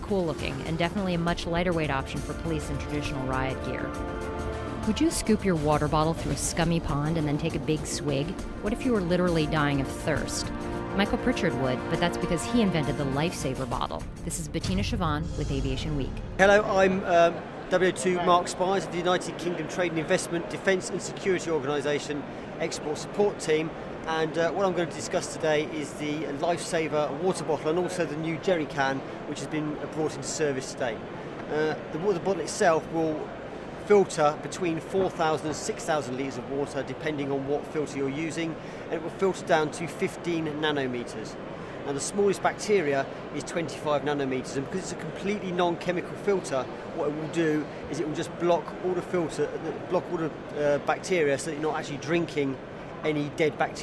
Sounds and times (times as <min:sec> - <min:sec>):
Speech: 0:00.0 - 0:03.8, 0:04.9 - 0:10.4, 0:33.9 - 0:53.8
Music: 0:00.0 - 0:16.6.